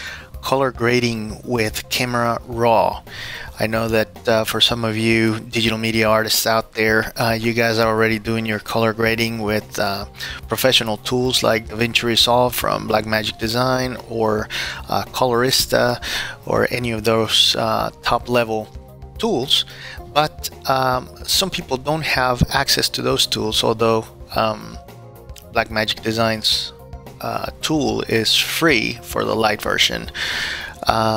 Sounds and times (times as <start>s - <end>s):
Music: 0.0s - 31.1s
Speech: 0.4s - 24.8s, 25.4s - 30.2s, 30.8s - 31.1s.